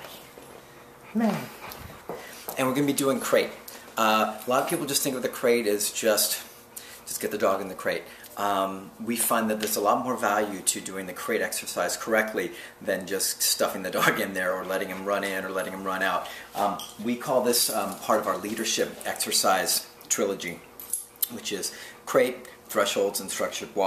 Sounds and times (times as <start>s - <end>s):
Inside, small room: 0.0s - 23.8s
Speech: 2.6s - 6.5s, 7.1s - 20.6s, 21.2s - 23.8s.